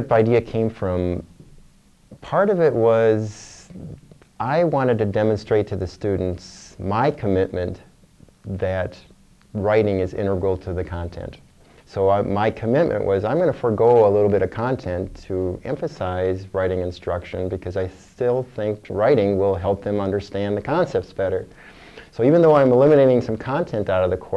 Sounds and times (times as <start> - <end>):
Speech: 0.0 - 1.3, 2.1 - 21.5, 22.1 - 24.3.